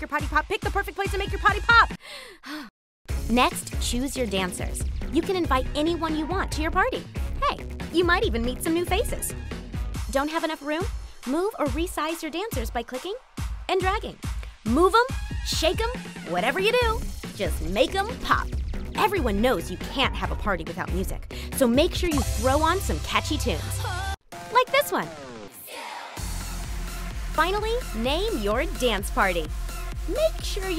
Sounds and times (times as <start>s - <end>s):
Speech: 0.0s - 1.9s, 3.3s - 9.3s, 10.1s - 23.9s, 24.6s - 25.2s, 27.4s - 29.5s, 30.1s - 30.7s
Music: 0.0s - 2.1s, 3.1s - 30.7s.